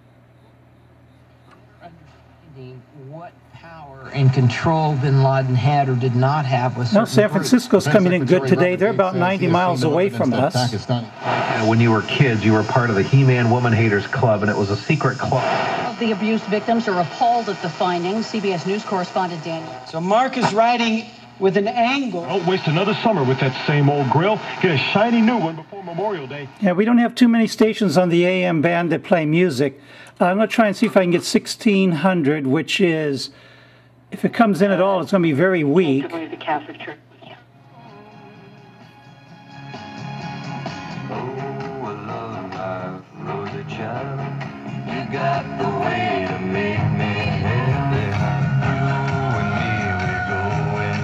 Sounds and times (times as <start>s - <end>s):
Speech: 1.8s - 19.5s, 22.6s - 33.3s, 34.1s - 37.4s
Radio: 4.0s - 28.4s, 34.7s - 37.5s
Music: 37.3s - 51.0s.